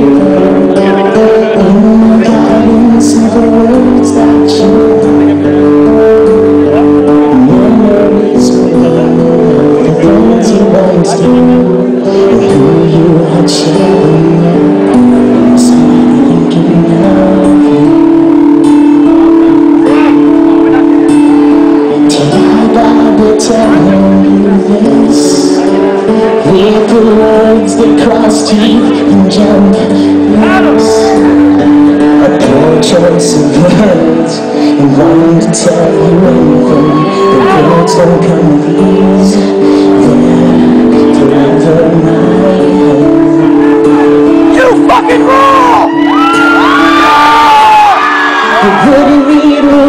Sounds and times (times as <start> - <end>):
Music: 0.0 - 49.8.